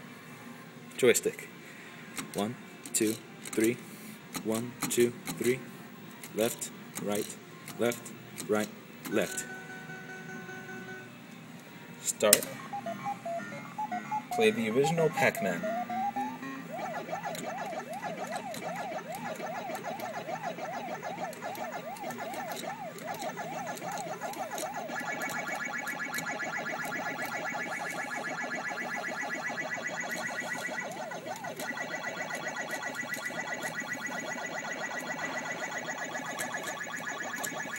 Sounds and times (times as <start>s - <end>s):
Speech: 2.4s - 3.8s, 4.4s - 5.6s, 6.4s - 9.5s, 14.3s - 15.6s
Music: 9.3s - 29.8s.